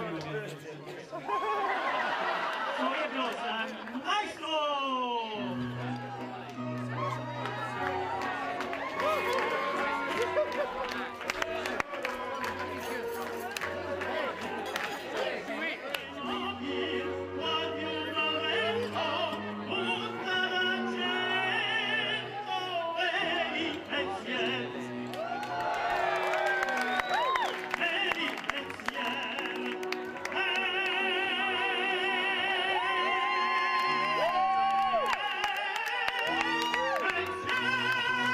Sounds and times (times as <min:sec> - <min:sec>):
Male singing: 0:15.2 - 0:25.1, 0:27.5 - 0:38.3.